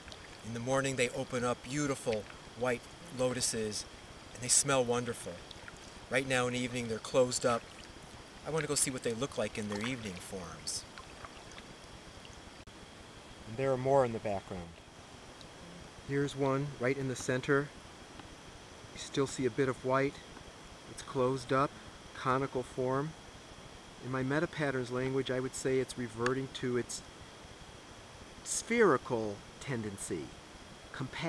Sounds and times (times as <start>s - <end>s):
Stream: 0.0s - 12.6s
Speech: 0.4s - 3.8s, 4.4s - 5.4s, 6.1s - 7.6s, 8.4s - 10.8s, 13.5s - 14.8s, 16.1s - 17.7s, 19.0s - 20.2s, 20.9s - 23.2s, 24.0s - 27.0s, 28.5s - 30.3s, 31.0s - 31.2s.